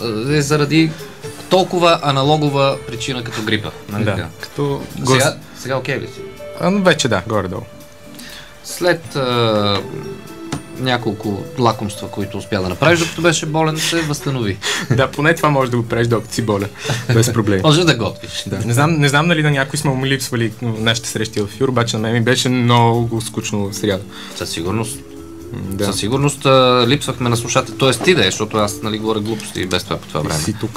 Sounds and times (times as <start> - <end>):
Speech: 0.0 - 7.7, 8.7 - 10.0, 10.8 - 30.7
Music: 0.0 - 30.7.